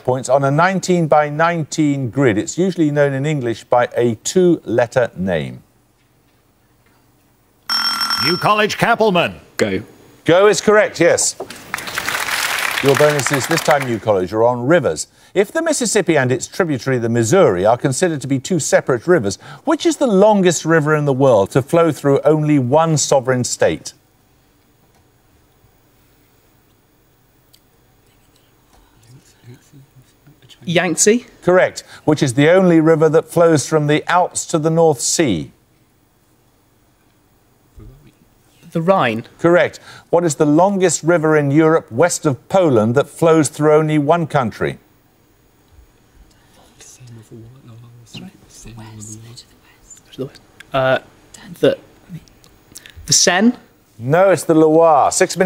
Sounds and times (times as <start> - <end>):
Buzzer: 7.7 - 8.6
Speech: 12.8 - 24.0, 53.1 - 55.4.